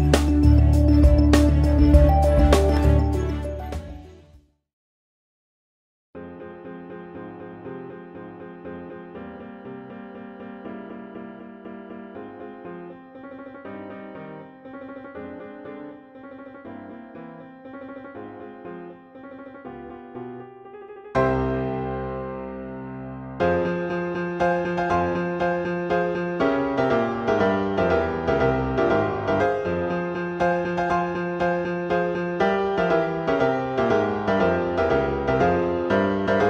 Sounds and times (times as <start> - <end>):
Piano: 0.0 - 4.4, 6.2 - 36.4.